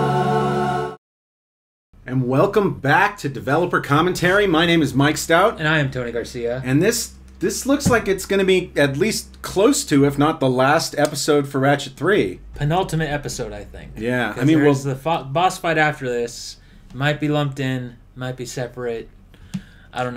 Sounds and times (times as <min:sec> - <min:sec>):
Speech: 0:02.0 - 0:19.1, 0:19.9 - 0:20.1.